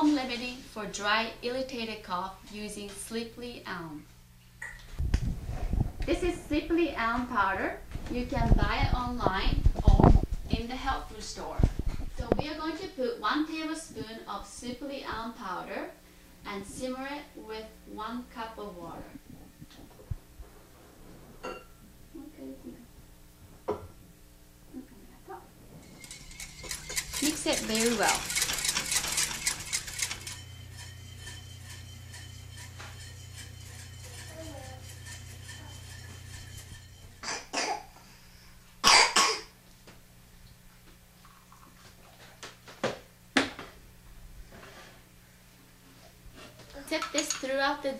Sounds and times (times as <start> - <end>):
Speech: 0.0 - 4.1, 6.1 - 19.2, 27.2 - 28.2, 46.7 - 47.9.